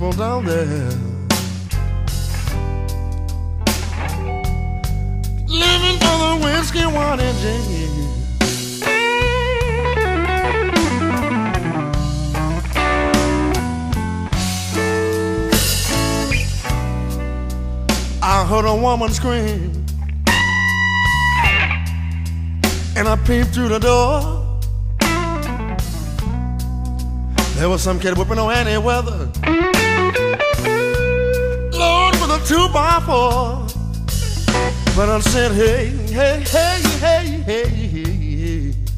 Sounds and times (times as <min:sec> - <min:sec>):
Steel guitar, slide guitar: 0:00.2 - 0:23.0, 0:25.0 - 0:37.6.